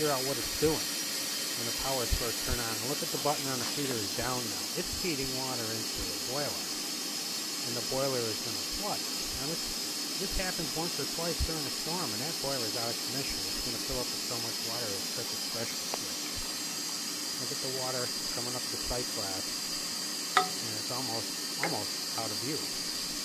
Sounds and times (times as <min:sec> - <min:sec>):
Speech: 0:00.0 - 0:00.8, 0:01.6 - 0:06.7, 0:07.6 - 0:16.4, 0:17.4 - 0:19.4, 0:20.4 - 0:22.7.